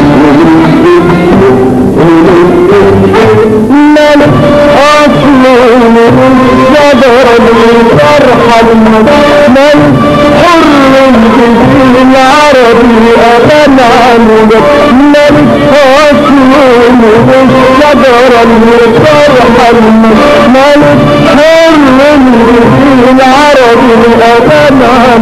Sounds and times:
Music: 0.0 - 25.2.

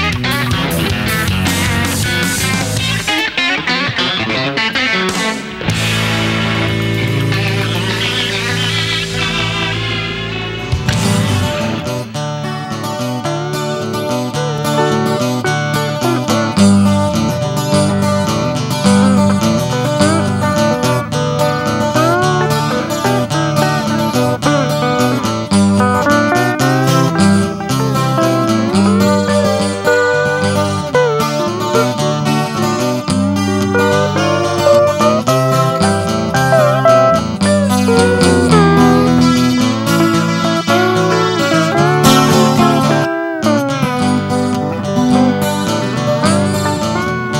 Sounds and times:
Music: 0.0 - 47.3.

